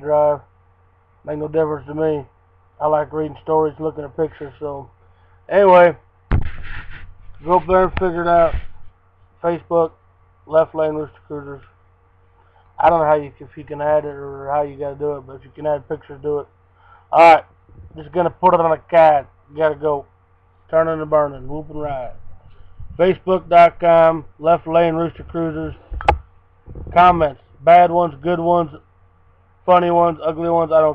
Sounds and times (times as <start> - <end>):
Speech: 0.0 - 0.5, 1.2 - 4.9, 5.5 - 6.0, 7.4 - 8.6, 9.4 - 11.7, 12.8 - 16.5, 17.1 - 20.1, 20.7 - 22.2, 23.0 - 25.8, 26.9 - 28.8, 29.7 - 30.9.